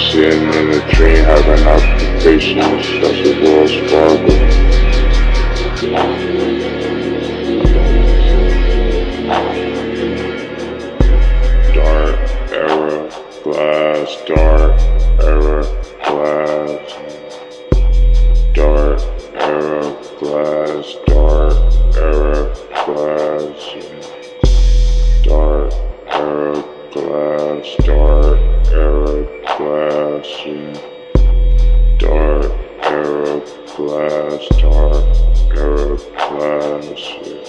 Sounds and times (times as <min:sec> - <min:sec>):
Music: 0:00.0 - 0:37.4.